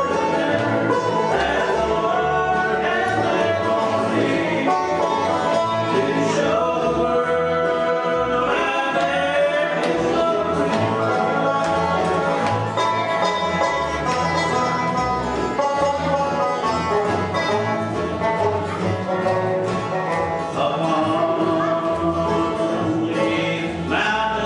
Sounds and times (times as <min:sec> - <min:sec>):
Country: 0:00.0 - 0:24.4.